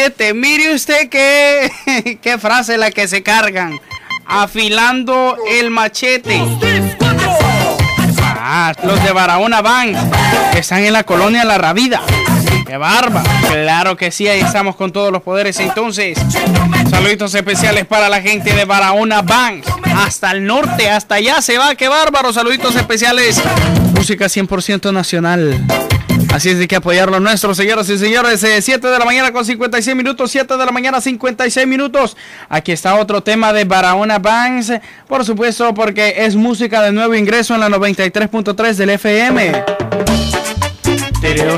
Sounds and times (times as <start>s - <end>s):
Speech: 0.0s - 6.8s, 8.4s - 25.6s, 26.3s - 39.6s, 41.2s - 41.5s
Music: 6.2s - 13.6s, 14.3s - 14.6s, 15.6s - 18.7s, 19.3s - 20.9s, 22.4s - 24.2s, 25.5s - 26.6s, 39.3s - 41.5s.